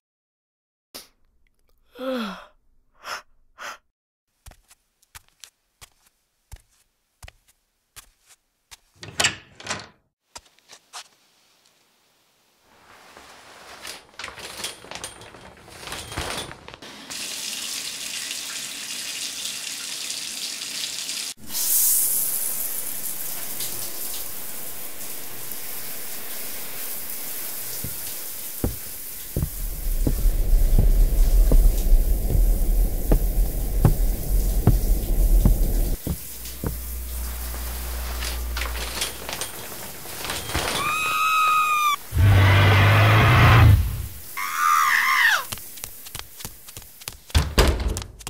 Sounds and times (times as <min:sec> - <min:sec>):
Sink (filling or washing): 0:16.9 - 0:40.8.